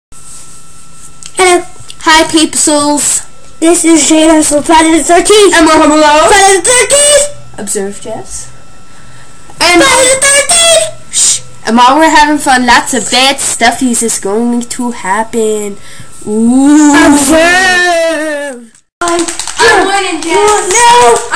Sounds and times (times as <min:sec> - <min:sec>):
Speech: 0:01.4 - 0:08.5, 0:09.6 - 0:21.3.